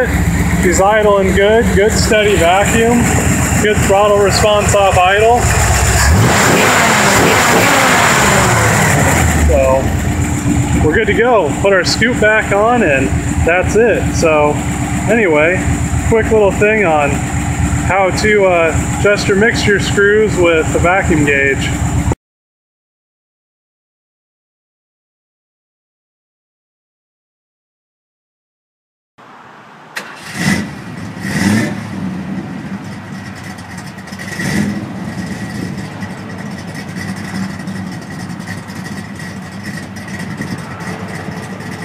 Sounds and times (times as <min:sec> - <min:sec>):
Speech: 0:00.0 - 0:05.5, 0:09.4 - 0:09.9, 0:10.8 - 0:17.2, 0:17.9 - 0:21.8
Car: 0:00.0 - 0:22.2, 0:29.2 - 0:41.8
Engine: 0:00.0 - 0:22.2, 0:29.2 - 0:41.8.